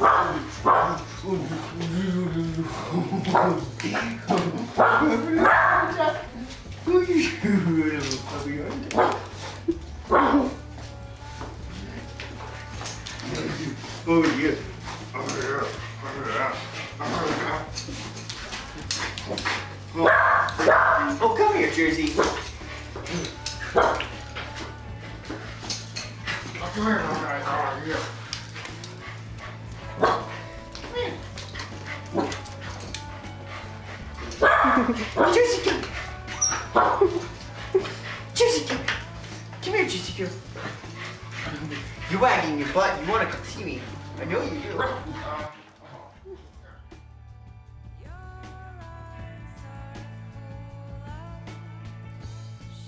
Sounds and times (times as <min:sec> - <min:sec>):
Dog: 0:00.0 - 0:01.9, 0:02.8 - 0:06.3, 0:08.8 - 0:10.6, 0:12.6 - 0:39.6, 0:40.3 - 0:46.9
Music: 0:00.0 - 0:52.8.